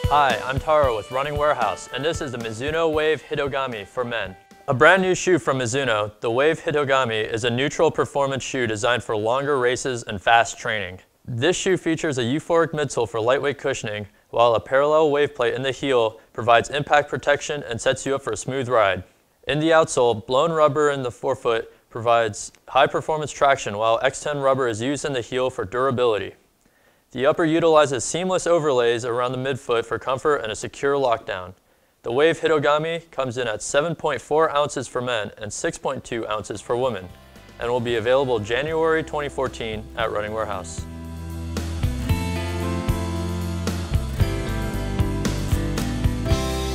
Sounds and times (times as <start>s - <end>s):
Speech: 0.1s - 26.4s, 27.1s - 40.9s.